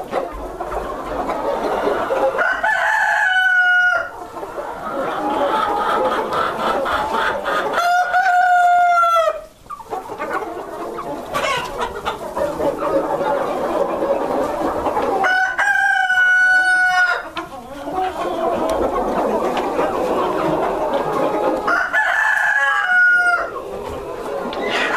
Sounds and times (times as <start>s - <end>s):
Cluck: 0.0s - 24.9s
Crowing, cock-a-doodle-doo: 2.4s - 4.1s, 7.8s - 9.4s, 15.2s - 17.2s, 21.7s - 23.5s.